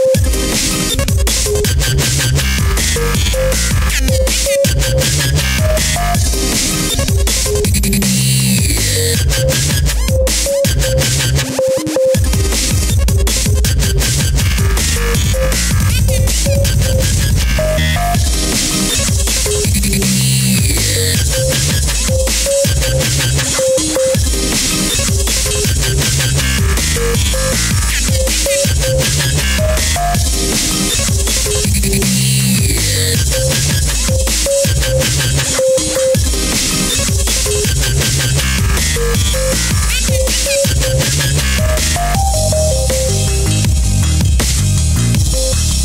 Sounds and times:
Dubstep: 0.0 - 45.8.

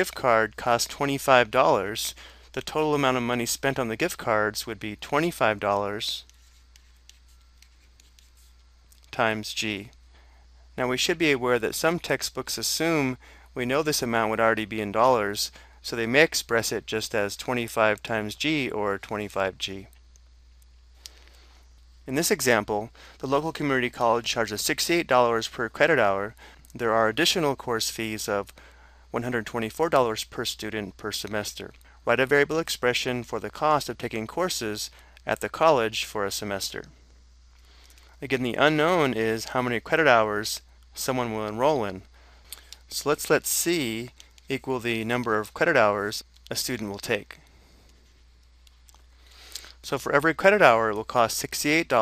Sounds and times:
Speech: 0.0 - 6.3, 9.0 - 10.0, 10.8 - 20.0, 22.1 - 28.5, 29.1 - 37.0, 38.2 - 42.1, 42.9 - 47.4, 49.8 - 52.0
Writing: 6.2 - 8.7.

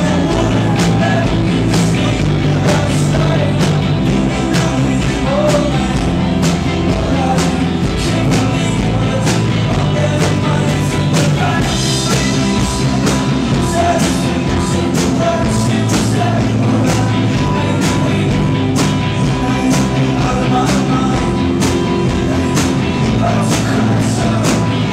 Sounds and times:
Music: 0.0 - 24.9.

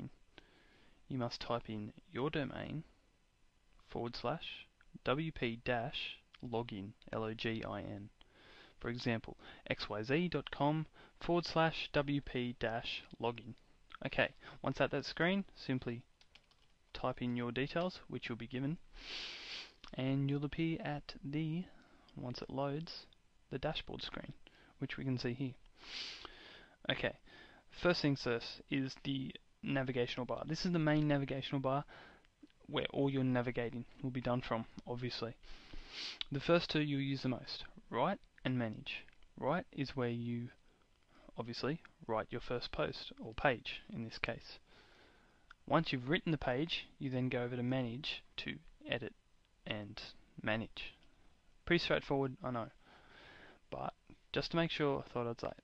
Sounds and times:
Speech: 1.1 - 2.9, 3.9 - 8.2, 8.8 - 16.1, 16.9 - 18.8, 19.9 - 25.6, 26.9 - 31.9, 32.6 - 35.4, 36.2 - 40.6, 41.3 - 44.6, 45.6 - 51.0, 51.7 - 52.8, 53.7 - 55.6.

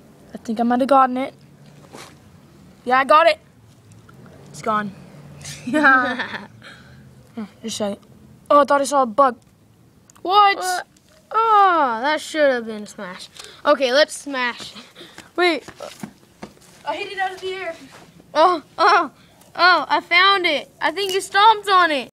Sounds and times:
Speech: 16.8 - 22.1.

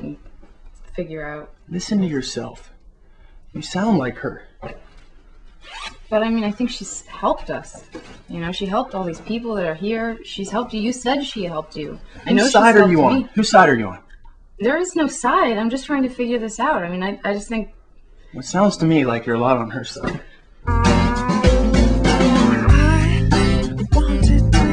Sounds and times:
Conversation: 0.0 - 20.7.

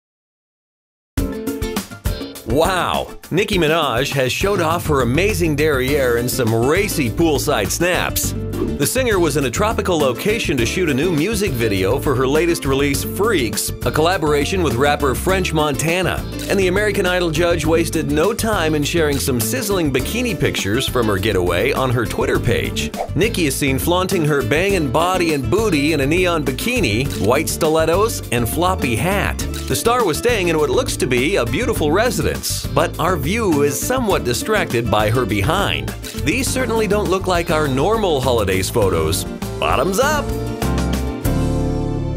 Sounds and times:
Music: 1.2 - 42.1
Speech: 2.5 - 40.3.

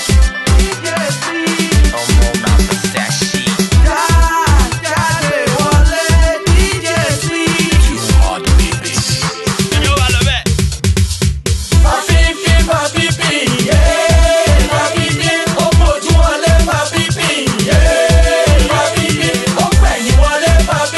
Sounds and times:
Funk: 0.1 - 20.9.

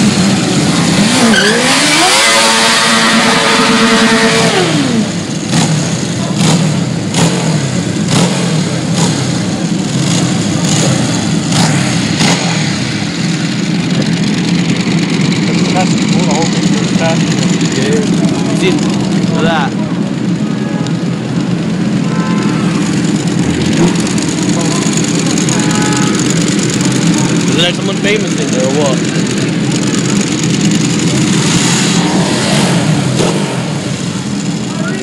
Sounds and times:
Motorcycle: 0.0 - 35.0
Outside, urban or manmade: 0.0 - 35.0.

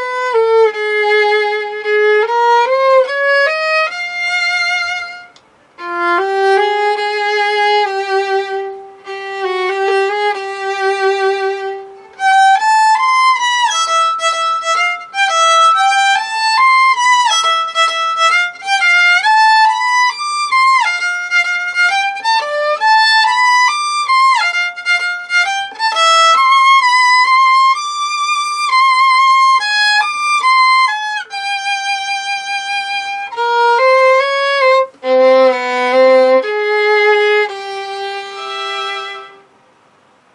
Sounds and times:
Violin, fiddle: 0.0 - 39.5.

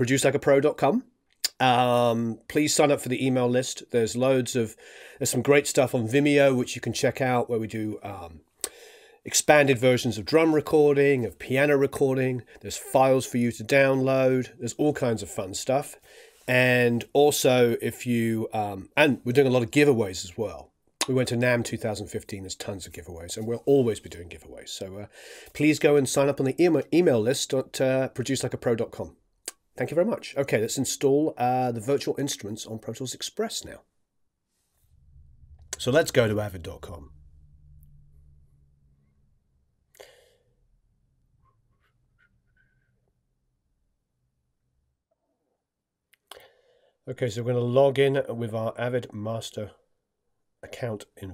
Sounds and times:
Speech: 0.0 - 8.4, 9.3 - 29.2, 29.8 - 33.8, 35.8 - 37.1, 47.1 - 49.8, 50.6 - 51.3.

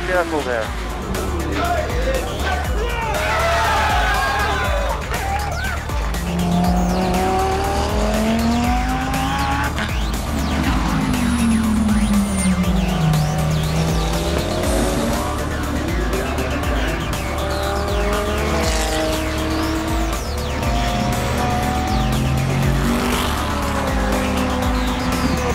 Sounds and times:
Music: 0.0 - 25.5
Race car, auto racing: 0.0 - 25.5.

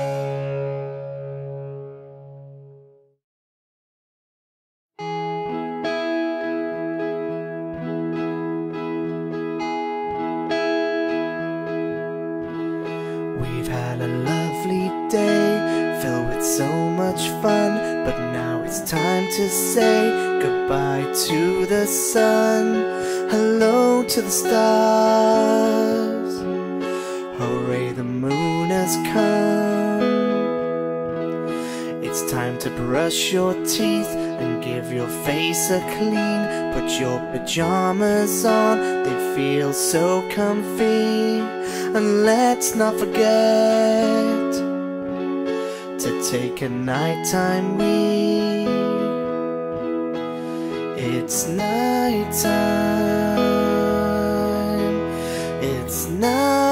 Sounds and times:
Acoustic guitar: 0.0 - 2.8, 5.0 - 56.7.

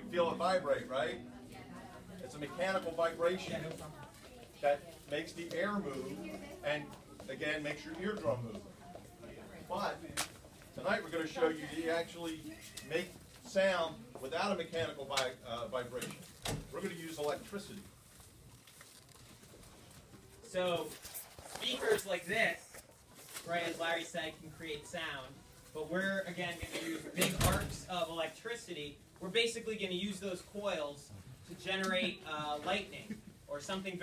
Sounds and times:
Speech: 20.5 - 22.8.

